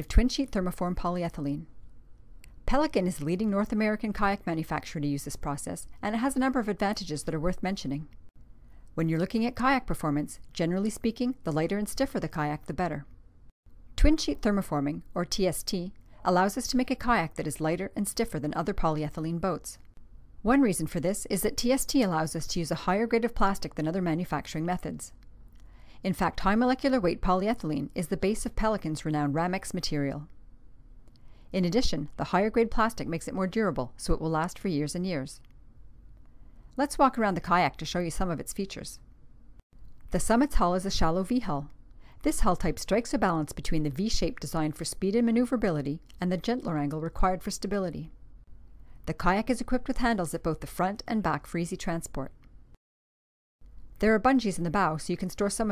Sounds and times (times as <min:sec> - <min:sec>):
Speech: 0:00.0 - 0:01.7, 0:02.7 - 0:08.1, 0:09.0 - 0:13.1, 0:14.0 - 0:19.8, 0:20.5 - 0:25.2, 0:26.0 - 0:30.3, 0:31.6 - 0:35.4, 0:36.8 - 0:39.0, 0:40.1 - 0:48.1, 0:49.1 - 0:52.4, 0:54.0 - 0:55.7.